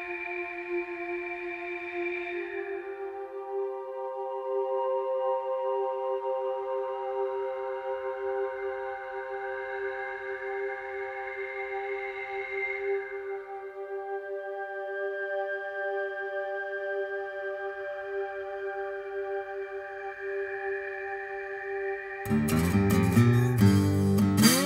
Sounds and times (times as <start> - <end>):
Music: 0.0 - 24.6.